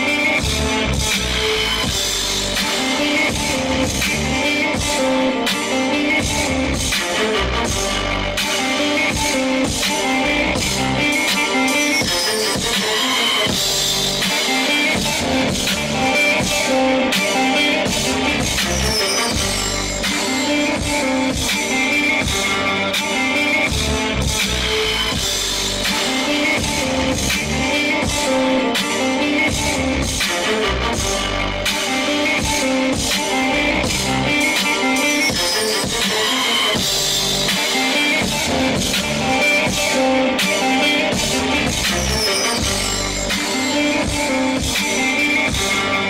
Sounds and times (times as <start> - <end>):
Drum machine: 0.0 - 46.1.